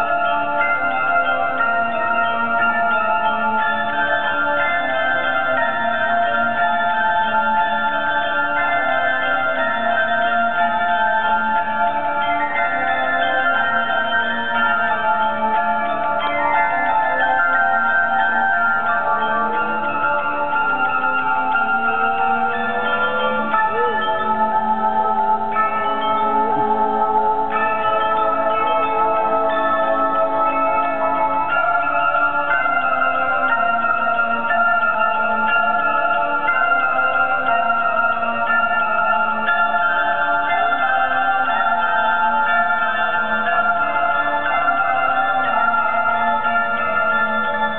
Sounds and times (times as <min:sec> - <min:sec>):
Bell: 0:00.0 - 0:47.7.